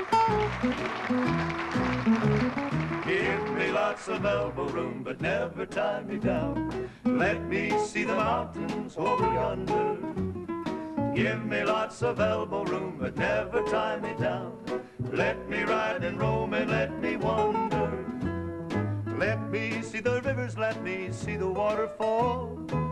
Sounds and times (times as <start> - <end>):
Music: 0.0 - 22.9
Male singing: 3.1 - 6.6, 7.2 - 10.2, 11.2 - 14.6, 15.2 - 18.0, 19.2 - 22.6.